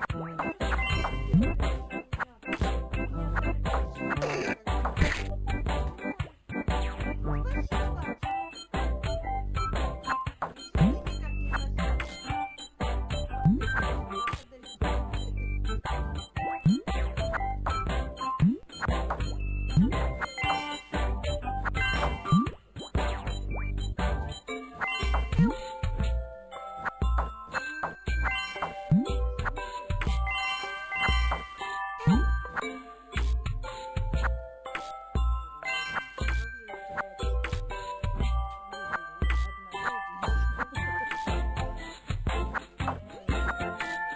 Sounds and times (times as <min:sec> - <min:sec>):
Music: 0:00.0 - 0:44.1
Speech: 0:01.9 - 0:06.3, 0:07.0 - 0:08.6, 0:10.8 - 0:12.6, 0:13.8 - 0:15.9, 0:36.2 - 0:37.2, 0:38.7 - 0:41.5, 0:42.8 - 0:43.8.